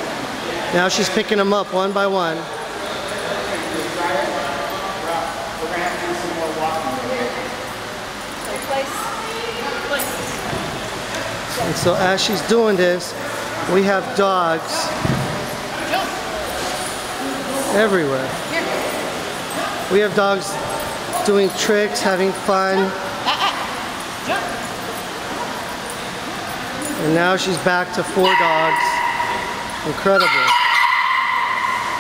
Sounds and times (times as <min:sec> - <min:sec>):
Bow-wow: 0:28.2 - 0:32.0
Yip: 0:30.2 - 0:32.0.